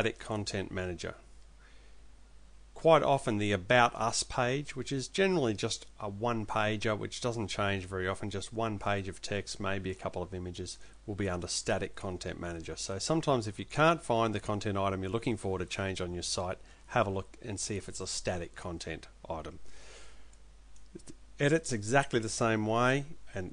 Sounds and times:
Speech: 0:00.0 - 0:01.2, 0:02.8 - 0:19.6, 0:21.0 - 0:23.5.

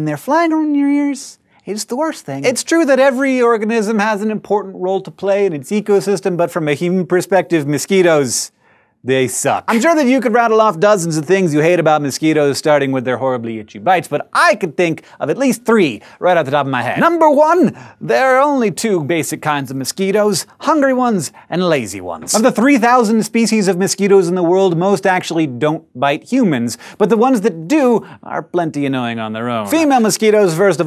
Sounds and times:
Speech: 0:00.0 - 0:08.5, 0:09.1 - 0:30.8.

